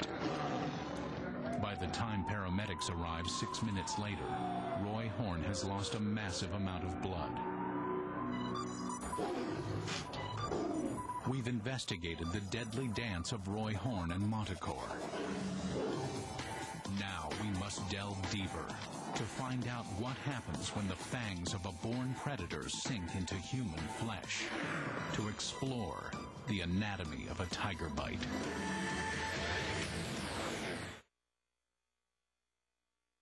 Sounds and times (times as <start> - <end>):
Music: 0.0 - 31.1
Speech: 1.6 - 7.4, 11.2 - 15.0, 16.9 - 24.5, 25.1 - 28.4.